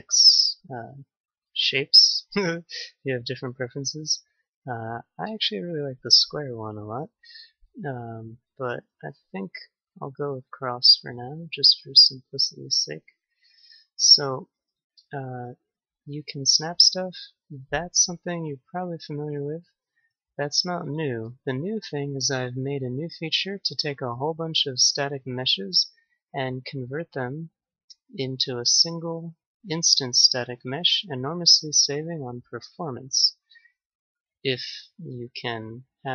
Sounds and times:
Speech: 0:00.0 - 0:01.0, 0:01.6 - 0:14.4, 0:15.1 - 0:19.6, 0:20.4 - 0:33.7, 0:34.5 - 0:36.1.

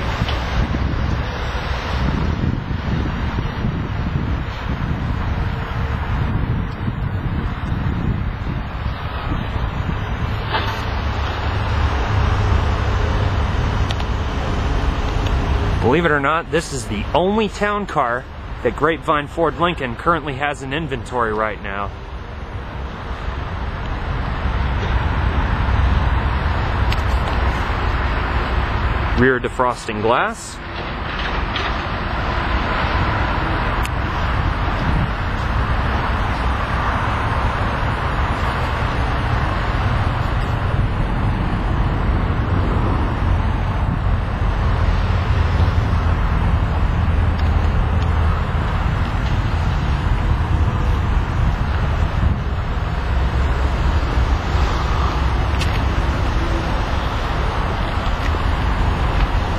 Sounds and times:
Car: 0:00.0 - 0:59.5
Traffic noise, roadway noise: 0:00.0 - 0:59.5.

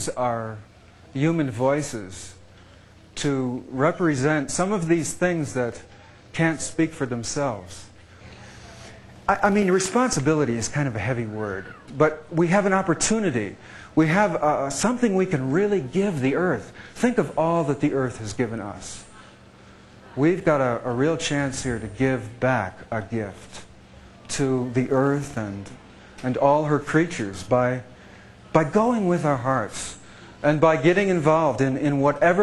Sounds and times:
Speech: 0:00.0 - 0:02.4, 0:03.2 - 0:19.4, 0:20.0 - 0:32.4.

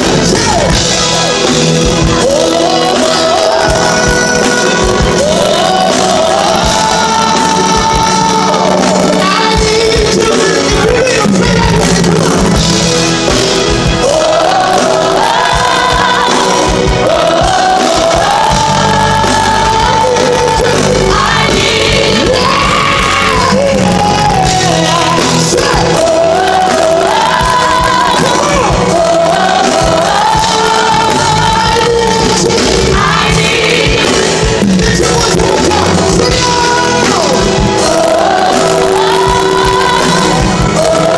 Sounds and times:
Music: 0:00.0 - 0:41.1
Singing: 0:02.1 - 0:12.7, 0:14.0 - 0:41.1.

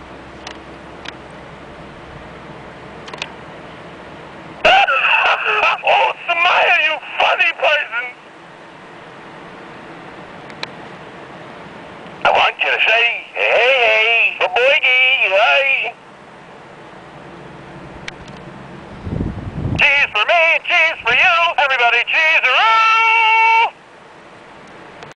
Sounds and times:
Speech: 0:04.7 - 0:08.2, 0:12.2 - 0:16.0, 0:19.8 - 0:23.8.

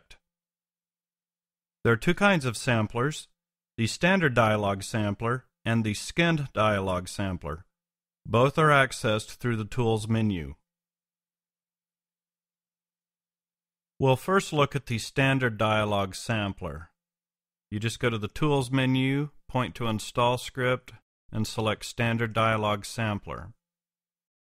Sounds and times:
Speech: 0:00.0 - 0:00.2, 0:01.9 - 0:07.7, 0:08.3 - 0:10.6, 0:14.0 - 0:17.0, 0:17.7 - 0:23.6.

